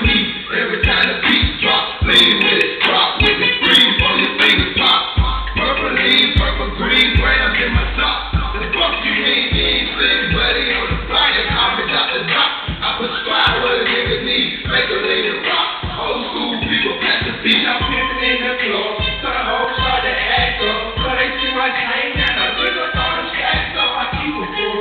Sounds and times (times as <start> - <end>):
Music: 0.0 - 24.8.